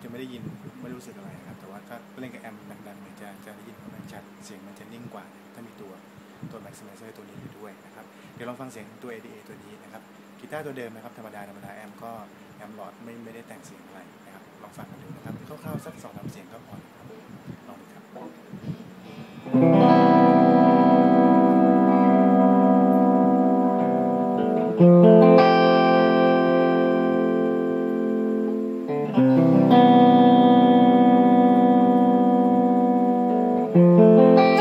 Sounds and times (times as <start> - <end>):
Speech: 0.0 - 18.4
Music: 19.0 - 34.6.